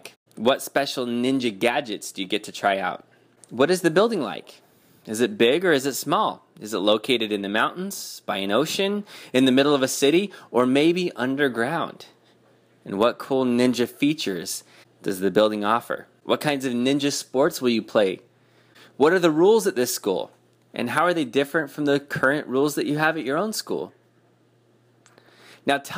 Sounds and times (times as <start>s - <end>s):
Speech: 0.0s - 12.2s, 12.8s - 18.3s, 19.0s - 24.0s, 25.6s - 25.9s.